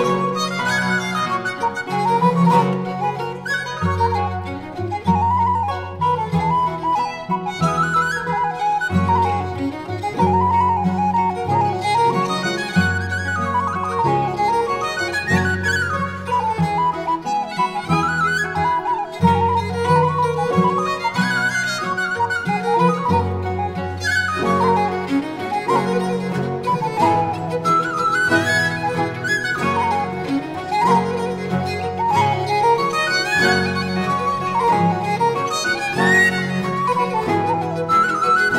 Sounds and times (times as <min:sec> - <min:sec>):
Violin, fiddle: 0:00.0 - 0:38.5.